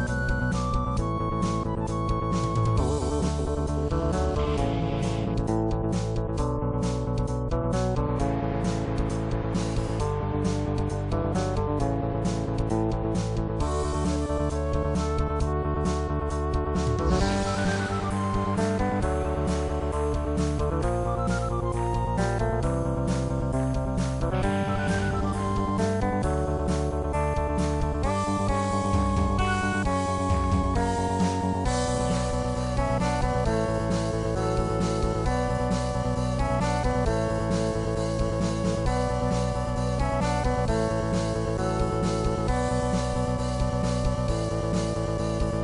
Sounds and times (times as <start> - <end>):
Guitar: 0.0 - 45.6.